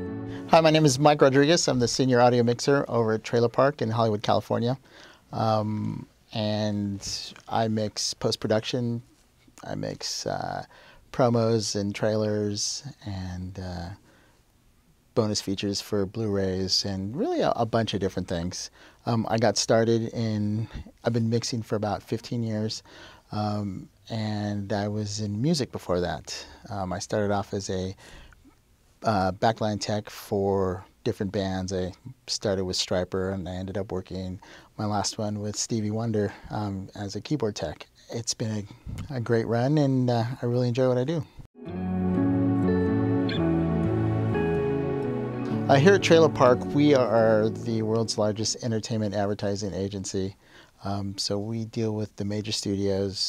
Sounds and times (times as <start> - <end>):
Speech: 0.5 - 14.0, 15.2 - 28.0, 29.0 - 41.4, 45.7 - 53.2.